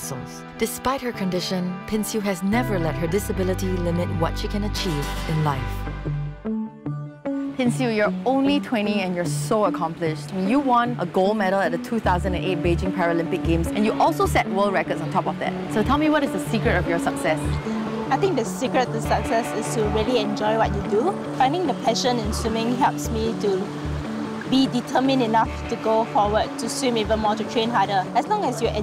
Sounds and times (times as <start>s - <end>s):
Speech: 0.0s - 5.8s, 7.6s - 17.5s, 18.1s - 23.7s, 24.5s - 28.8s
Music: 0.0s - 28.8s.